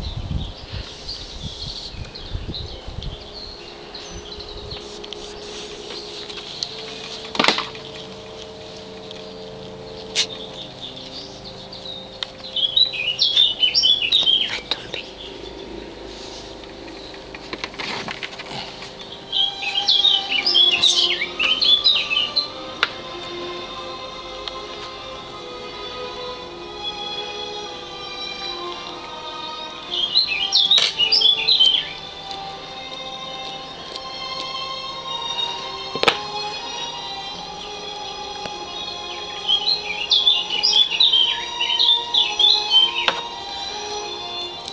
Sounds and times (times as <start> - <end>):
Animal: 16.3 - 22.0.